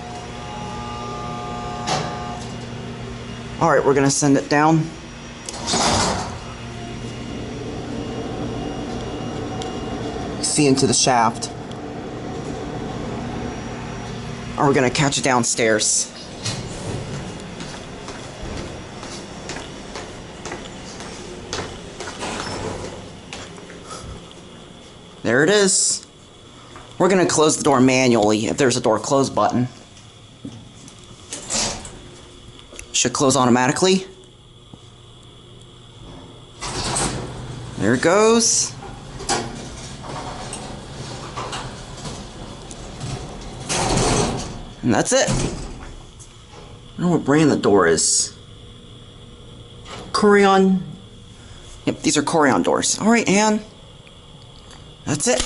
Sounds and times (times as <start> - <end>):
Speech: 3.6 - 5.0, 10.4 - 11.6, 14.6 - 16.2, 25.2 - 26.1, 27.0 - 29.8, 32.9 - 34.1, 37.8 - 38.8, 44.8 - 45.4, 47.0 - 48.4, 50.1 - 51.0, 51.9 - 53.7, 55.1 - 55.4
Sliding door: 5.5 - 11.0, 16.3 - 17.4, 22.2 - 23.1, 31.4 - 32.0, 36.0 - 37.6, 38.8 - 44.6.